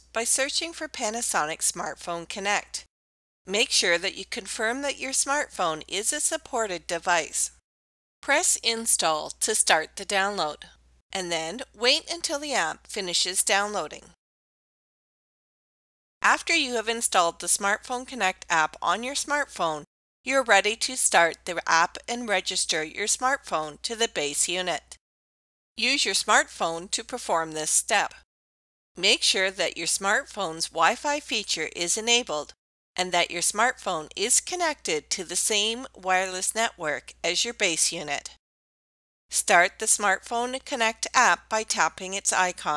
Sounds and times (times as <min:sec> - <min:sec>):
Speech: 0:00.0 - 0:02.9, 0:03.5 - 0:07.6, 0:08.2 - 0:14.2, 0:16.2 - 0:25.0, 0:25.8 - 0:28.2, 0:29.0 - 0:38.4, 0:39.3 - 0:42.7.